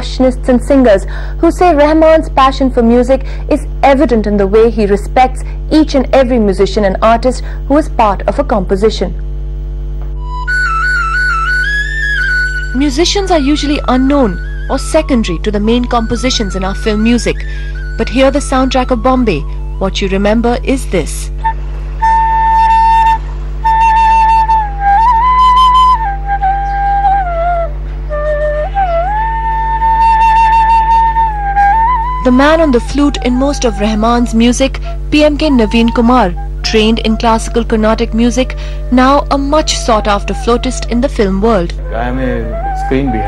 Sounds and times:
Speech: 0.0s - 9.2s, 12.8s - 17.4s, 18.0s - 21.3s, 32.2s - 43.2s
Music: 1.6s - 3.0s, 10.0s - 43.2s.

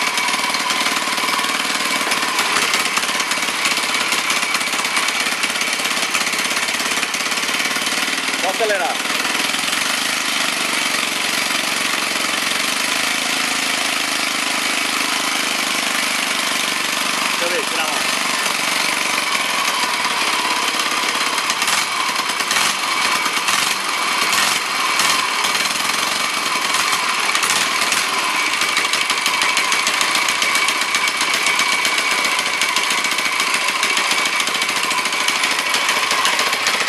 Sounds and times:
Vehicle: 0.0s - 36.8s
Speech: 8.4s - 9.0s, 17.4s - 18.1s.

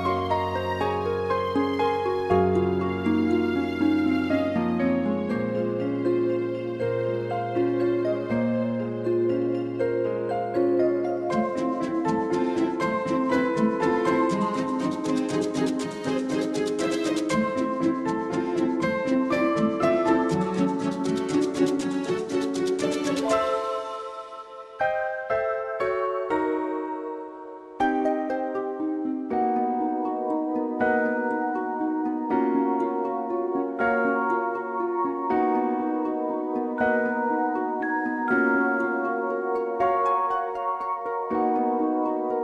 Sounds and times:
Music: 0.0s - 42.4s.

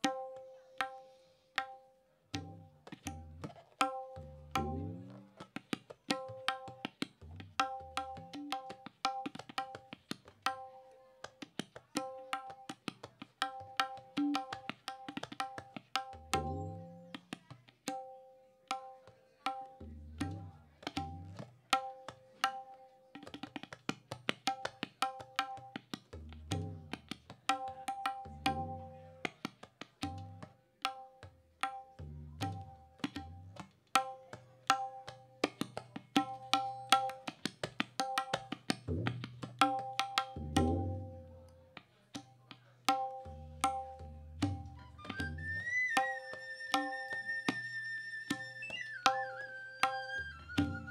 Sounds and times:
Wood block: 0.0s - 50.9s.

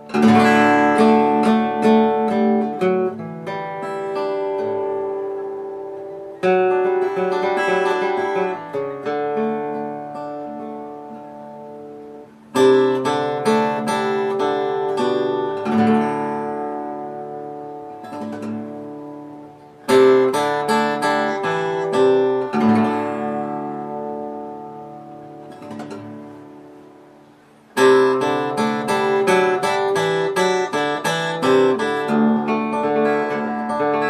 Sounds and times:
Strum: 0.0s - 34.1s.

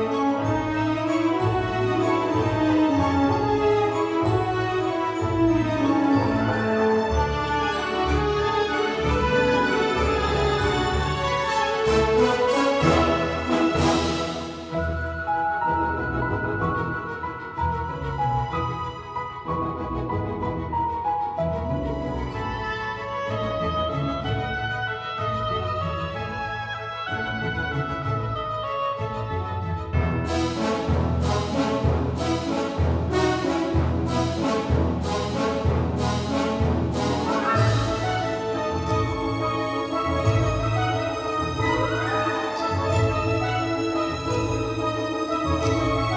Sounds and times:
Music: 0.0s - 46.1s.

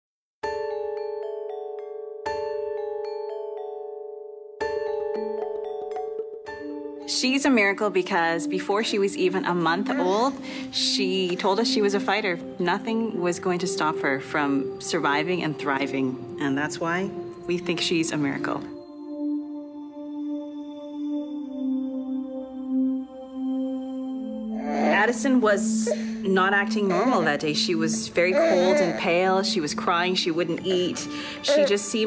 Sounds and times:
Glockenspiel: 0.4s - 7.2s
Speech: 7.1s - 18.7s, 24.9s - 32.0s.

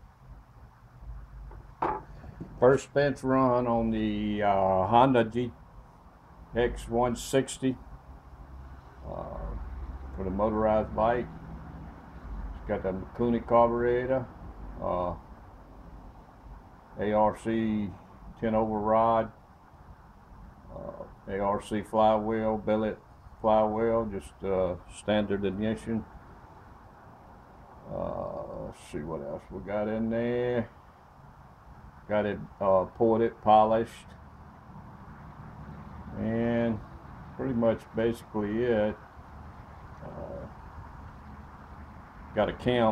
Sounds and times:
Speech: 2.6s - 5.6s, 6.5s - 7.8s, 9.0s - 11.3s, 12.6s - 15.2s, 17.0s - 19.4s, 20.7s - 26.1s, 27.8s - 30.7s, 32.1s - 34.2s, 36.1s - 39.0s, 40.0s - 40.6s, 42.3s - 42.9s.

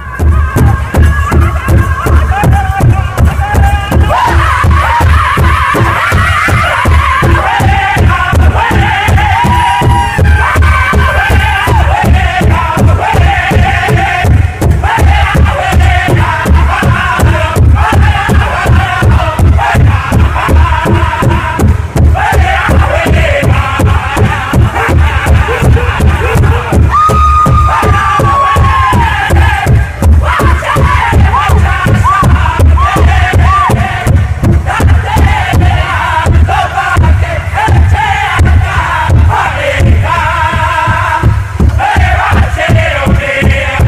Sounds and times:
Music: 0.0s - 43.8s.

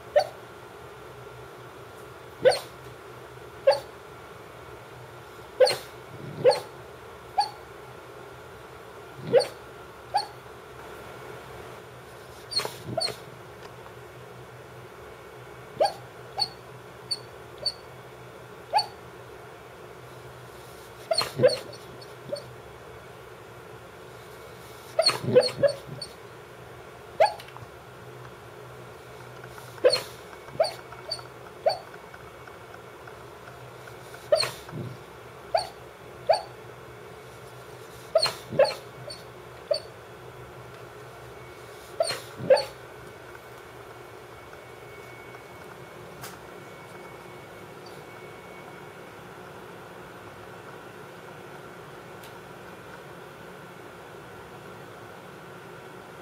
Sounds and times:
Bark: 0.1s - 0.4s, 2.4s - 2.7s, 3.6s - 3.9s, 5.6s - 6.7s, 7.4s - 7.6s, 9.2s - 10.4s, 12.5s - 13.2s, 15.8s - 16.6s, 18.7s - 19.0s, 21.1s - 22.5s, 25.0s - 26.1s, 27.2s - 27.4s, 29.8s - 31.9s, 34.3s - 34.9s, 35.5s - 36.6s, 38.1s - 39.9s, 42.0s - 42.8s
Canidae, dogs, wolves: 0.1s - 0.4s, 2.4s - 2.9s, 3.6s - 4.0s, 5.6s - 7.7s, 9.2s - 10.4s, 12.3s - 13.4s, 15.7s - 17.9s, 18.6s - 19.1s, 20.6s - 22.6s, 24.2s - 26.2s, 27.2s - 27.7s, 29.1s - 36.6s, 37.3s - 40.0s, 41.6s - 42.9s.

